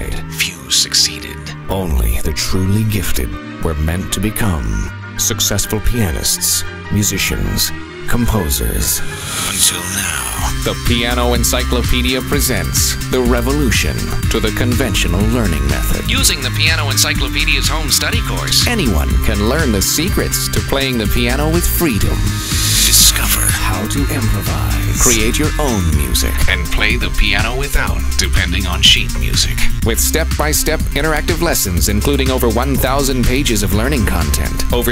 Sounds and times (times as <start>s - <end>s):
Music: 0.0s - 34.9s
Speech: 0.0s - 34.9s.